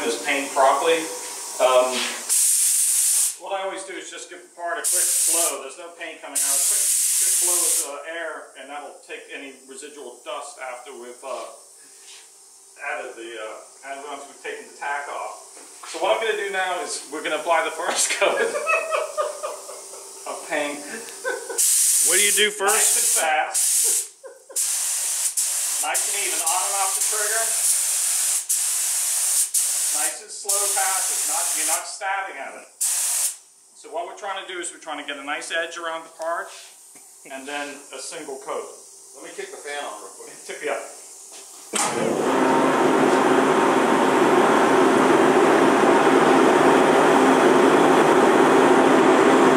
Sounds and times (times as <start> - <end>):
Speech: 0.0 - 2.3, 3.4 - 11.6, 12.8 - 18.8, 20.3 - 21.0, 22.0 - 23.6, 25.8 - 27.6, 29.9 - 32.7, 33.8 - 36.6, 37.3 - 41.0
Inside, small room: 0.0 - 45.0.